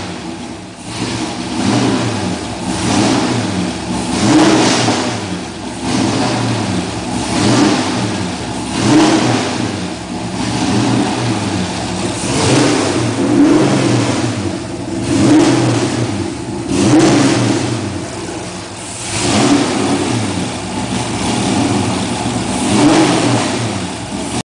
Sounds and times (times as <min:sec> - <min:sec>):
Accelerating, revving, vroom: 0:00.9 - 0:17.9, 0:19.0 - 0:24.4.